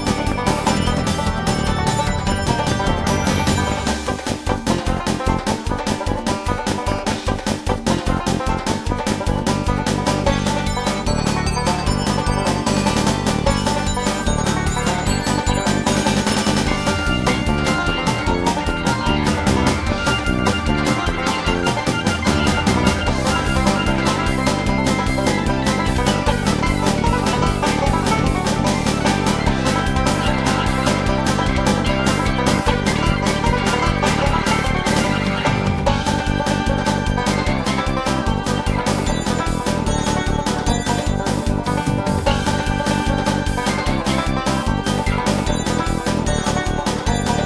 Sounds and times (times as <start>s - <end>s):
Soundtrack music: 0.0s - 47.4s.